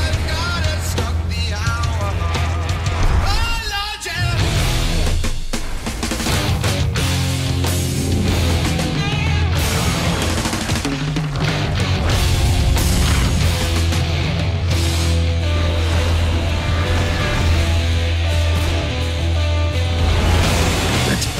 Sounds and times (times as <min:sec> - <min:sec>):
Music: 0:00.0 - 0:21.3.